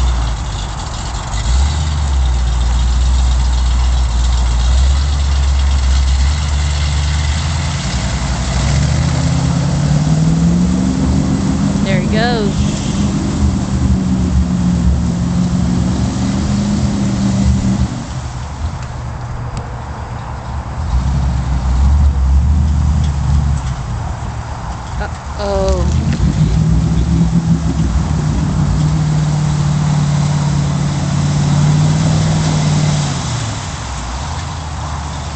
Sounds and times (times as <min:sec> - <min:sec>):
Speech: 0:11.8 - 0:12.6, 0:25.0 - 0:25.9.